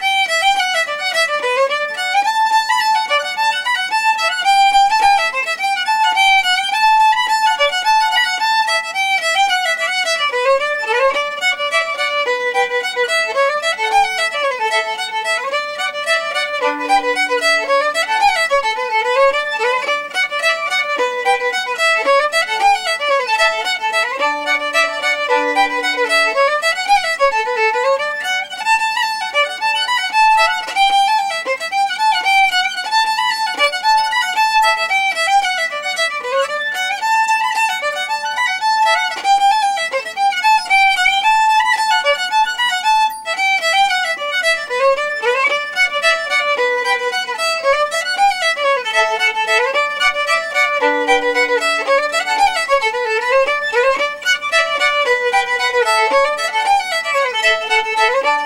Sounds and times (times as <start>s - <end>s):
Violin, fiddle: 0.0s - 58.4s.